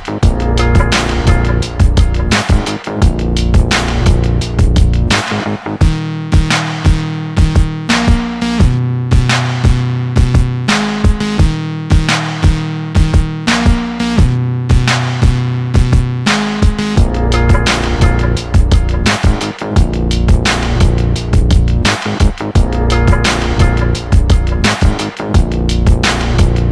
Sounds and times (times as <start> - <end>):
Music: 0.0 - 26.7.